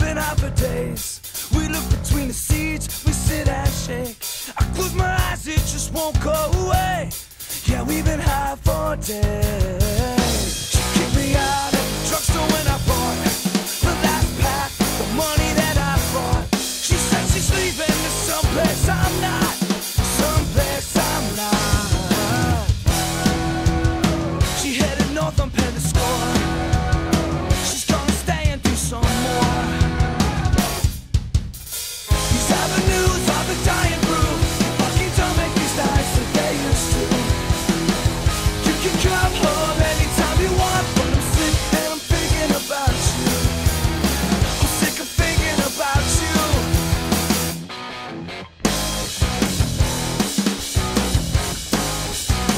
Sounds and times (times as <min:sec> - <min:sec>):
Grunge: 0:00.0 - 0:52.5.